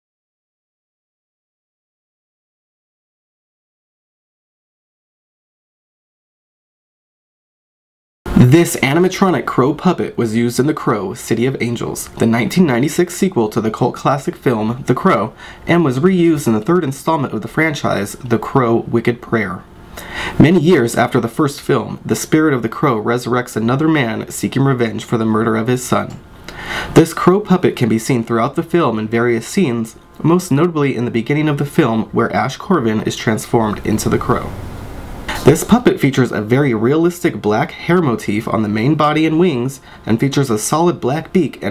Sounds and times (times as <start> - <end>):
Speech: 8.3 - 19.7, 20.4 - 26.2, 26.9 - 34.6, 35.3 - 41.7.